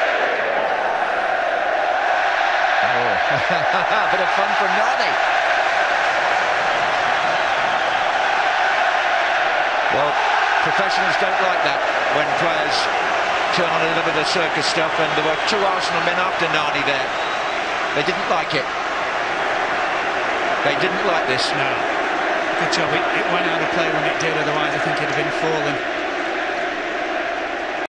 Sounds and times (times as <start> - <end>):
Speech: 2.8 - 5.2, 10.0 - 12.9, 13.5 - 17.1, 18.0 - 18.7, 20.6 - 21.8, 22.6 - 25.8.